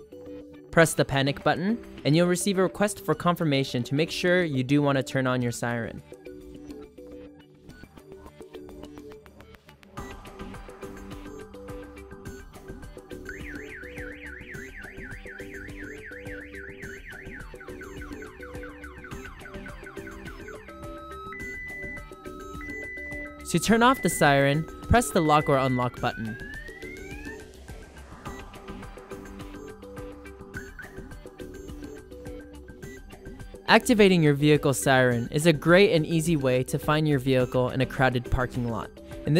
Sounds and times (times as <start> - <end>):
Music: 0.0 - 39.3
Speech: 0.8 - 6.0, 23.5 - 26.4, 33.7 - 39.3.